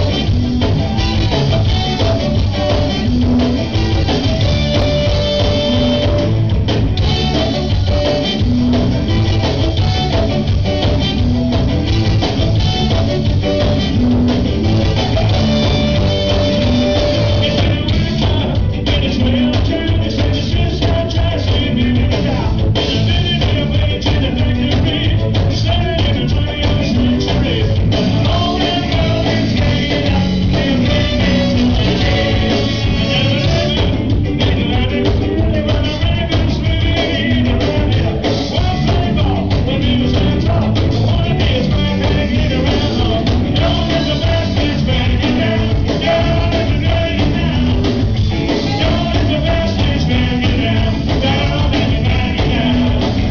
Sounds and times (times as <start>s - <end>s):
Music: 0.0s - 53.3s.